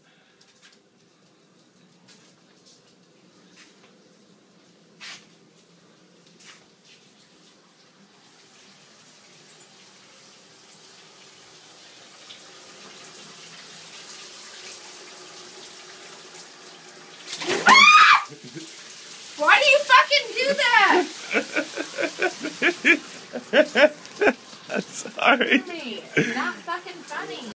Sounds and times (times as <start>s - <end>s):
Speech: 19.4s - 21.1s, 25.2s - 27.5s.